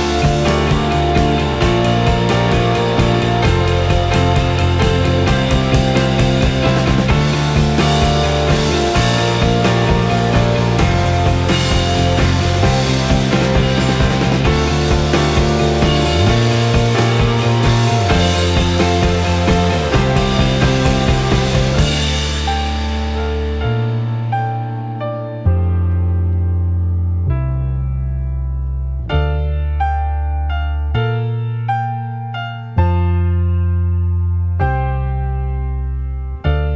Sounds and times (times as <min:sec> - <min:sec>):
Cymbal: 0:00.0 - 0:24.6.